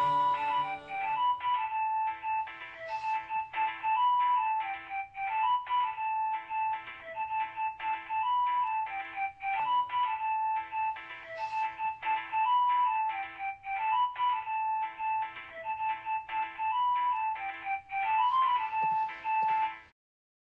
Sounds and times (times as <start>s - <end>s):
Ringtone: 0.0s - 19.9s
Music: 0.0s - 20.0s.